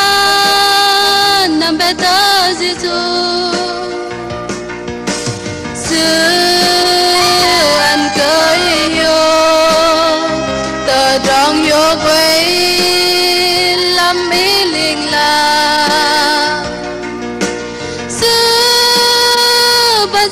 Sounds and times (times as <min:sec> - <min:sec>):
Singing: 0:05.9 - 0:16.6.